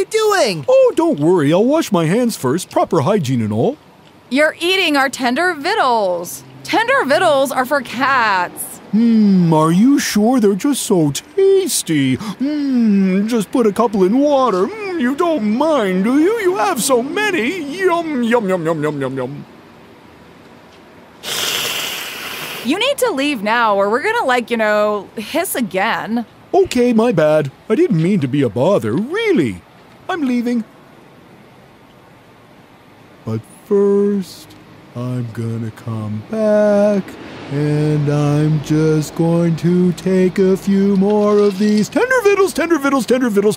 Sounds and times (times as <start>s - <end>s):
Speech: 0.0s - 19.4s, 22.7s - 30.7s, 33.3s - 43.5s.